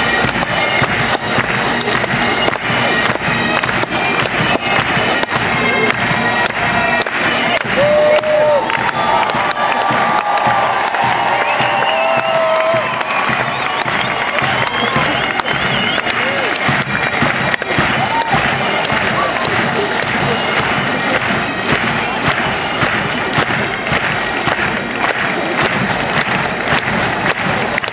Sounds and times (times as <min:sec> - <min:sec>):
Cheering: 0:00.0 - 0:27.9
Music: 0:00.0 - 0:27.9.